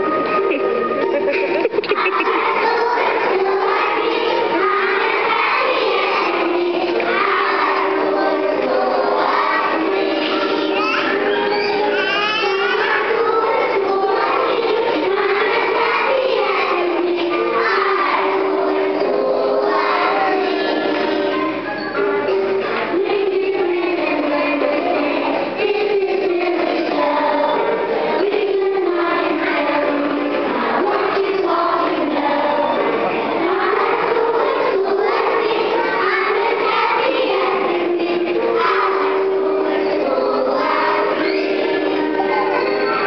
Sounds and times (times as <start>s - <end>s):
Choir: 1.2s - 43.0s
Child singing: 1.8s - 43.0s.